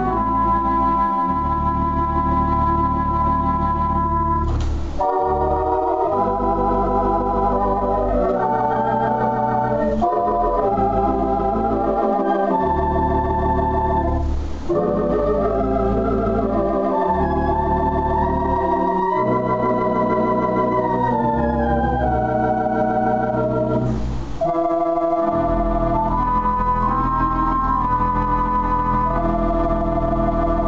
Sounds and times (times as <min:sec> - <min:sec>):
Organ: 0:00.0 - 0:30.6
Piano: 0:00.0 - 0:30.6.